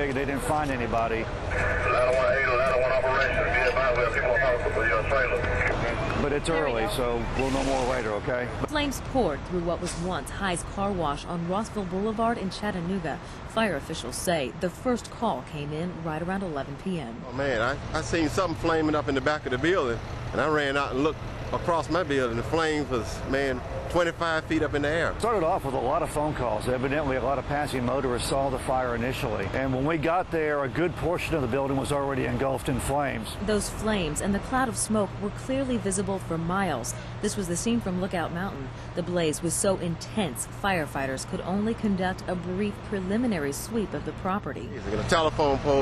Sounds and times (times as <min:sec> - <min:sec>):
Speech: 0:00.0 - 0:45.8.